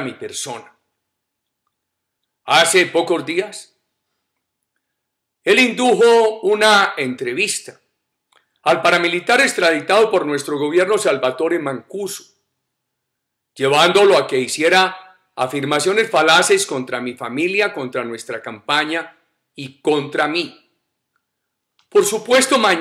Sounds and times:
Speech: 0:00.0 - 0:00.8, 0:02.5 - 0:03.7, 0:05.5 - 0:07.8, 0:08.7 - 0:12.3, 0:13.6 - 0:20.6, 0:21.9 - 0:22.8.

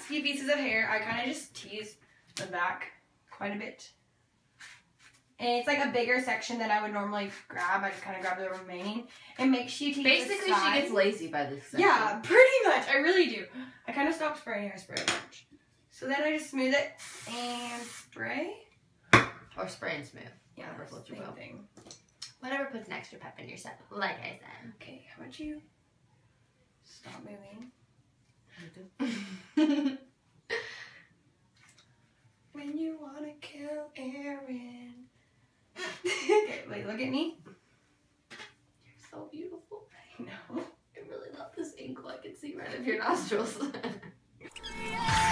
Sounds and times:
Speech: 0:05.4 - 0:15.1, 0:39.0 - 0:43.9.

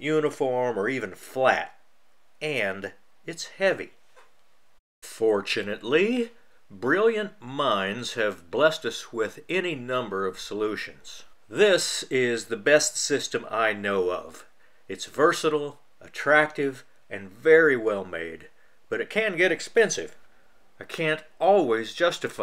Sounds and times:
Speech: 0:00.0 - 0:01.8, 0:02.4 - 0:04.0, 0:05.0 - 0:20.2, 0:20.8 - 0:22.4.

